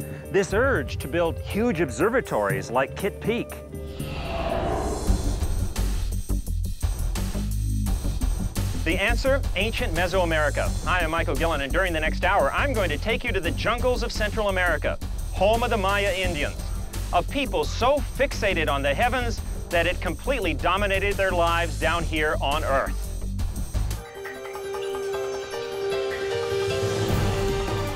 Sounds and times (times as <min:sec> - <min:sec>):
Music: 0:00.0 - 0:27.9
Speech: 0:00.3 - 0:03.6, 0:08.8 - 0:22.9.